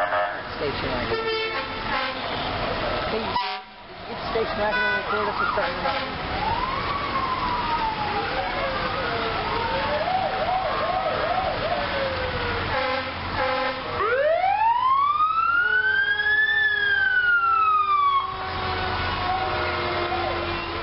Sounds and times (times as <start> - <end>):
Ambulance (siren): 0.0 - 0.5, 3.3 - 20.8
Police car (siren): 5.0 - 13.0, 13.9 - 20.8.